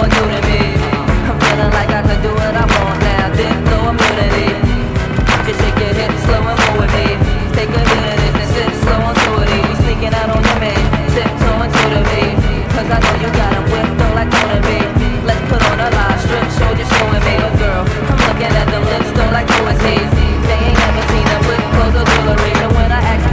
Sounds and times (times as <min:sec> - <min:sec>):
Exciting music: 0:00.0 - 0:23.3.